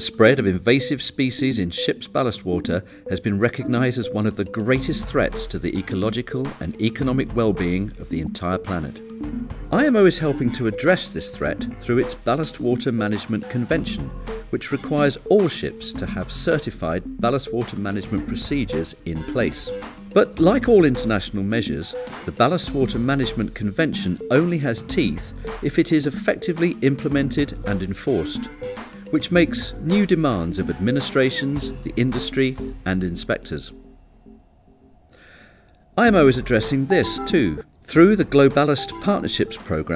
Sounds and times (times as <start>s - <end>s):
Speech: 0.0s - 9.0s, 9.7s - 28.5s, 29.1s - 33.8s, 36.0s - 39.9s
Music: 0.0s - 35.4s, 36.0s - 39.9s.